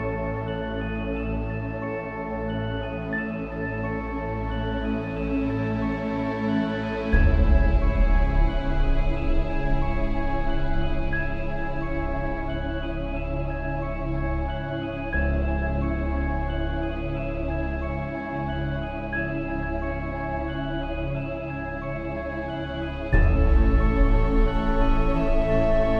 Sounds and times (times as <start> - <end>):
Music: 0.0 - 25.9.